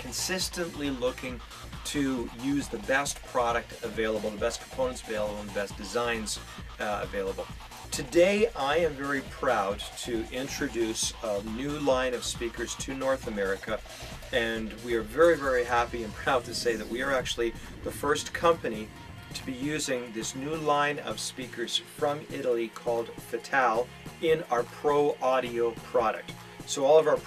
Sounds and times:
Music: 0.0 - 27.2
Speech: 0.0 - 27.2.

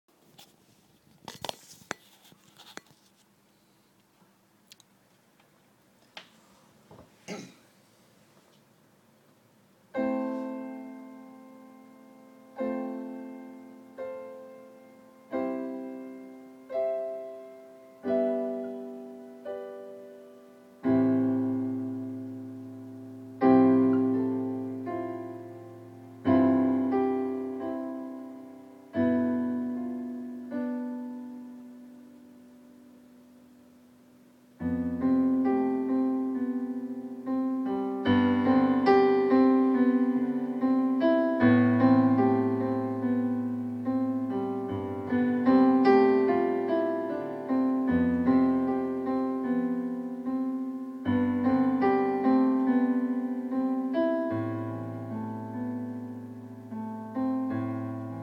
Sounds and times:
Inside, small room: 0.1 - 58.2
Piano: 9.4 - 58.2.

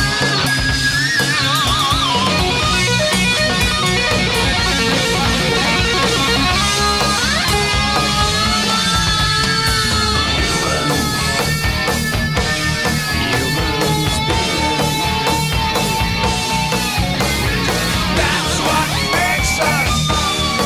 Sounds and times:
Music: 0.0 - 20.6
Speech: 10.4 - 11.5, 13.2 - 15.4, 17.5 - 20.2.

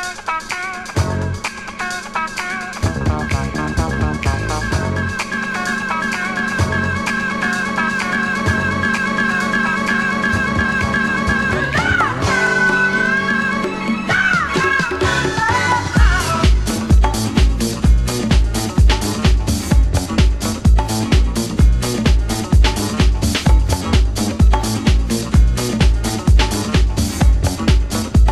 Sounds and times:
Music: 0.0 - 28.3.

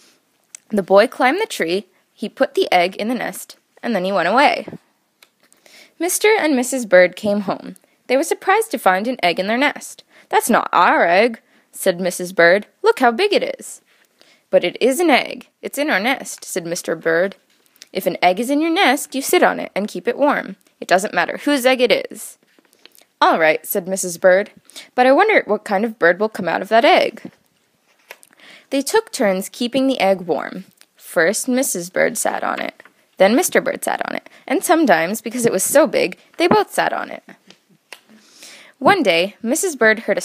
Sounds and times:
Speech: 0.6 - 4.8, 6.0 - 13.8, 14.5 - 22.4, 23.2 - 27.3, 28.7 - 37.4, 38.8 - 40.2.

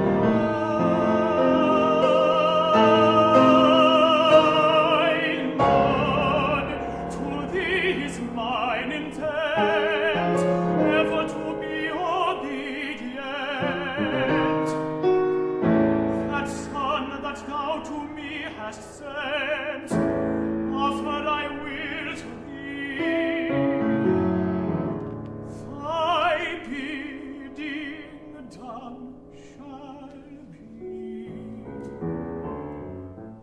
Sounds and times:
Opera: 0.0 - 33.4.

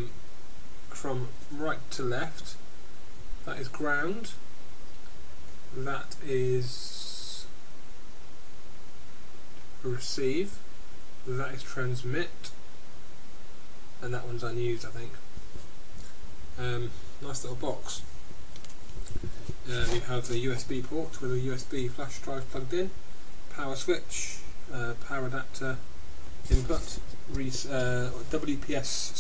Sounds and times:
Speech: 0.9 - 2.6, 3.4 - 4.4, 5.7 - 7.6, 9.8 - 10.6, 11.3 - 12.6, 14.0 - 15.2, 16.6 - 18.1, 19.6 - 25.8, 26.5 - 29.2.

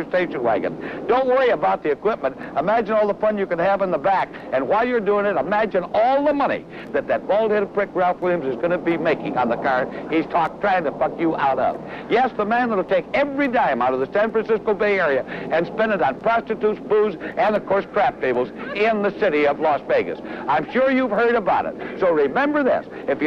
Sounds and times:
Speech: 0.0 - 23.2.

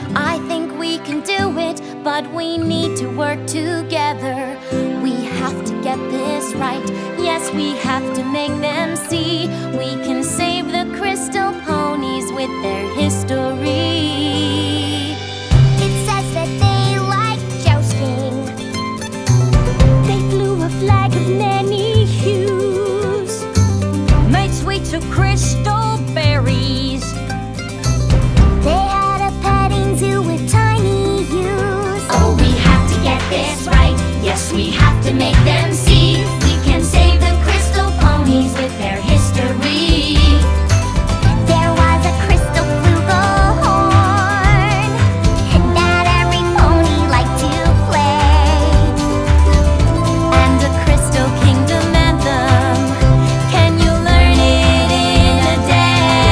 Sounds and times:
Music for children: 0.0 - 56.3.

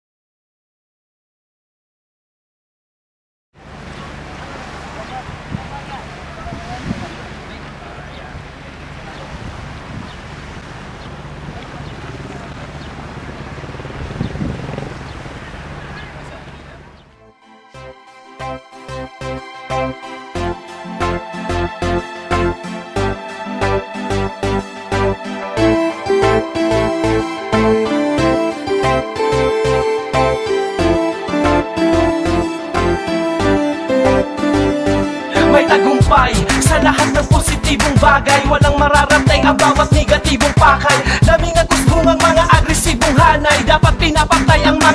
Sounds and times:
Waves, surf: 3.6 - 17.0
Wind noise (microphone): 6.4 - 7.3, 9.2 - 10.8, 11.4 - 15.7.

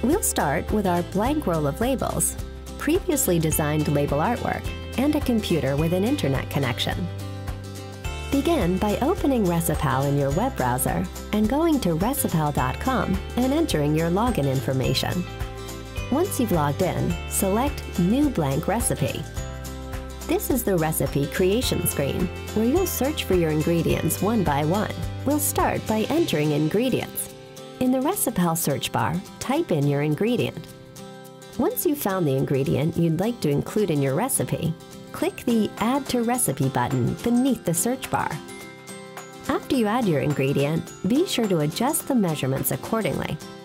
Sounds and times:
Speech: 0.0 - 7.1, 8.3 - 15.2, 16.1 - 19.3, 20.3 - 30.7, 31.6 - 38.5, 39.5 - 43.4
Music: 0.0 - 43.6.

